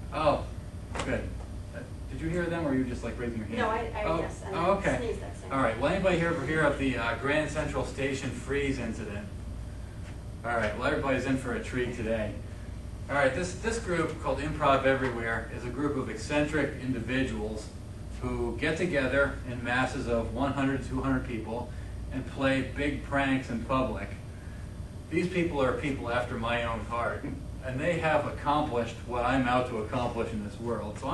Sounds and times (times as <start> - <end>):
Narration, monologue: 0.0 - 31.1
Male speech, man speaking: 0.1 - 9.4, 10.4 - 12.4, 13.1 - 24.2, 25.1 - 31.1.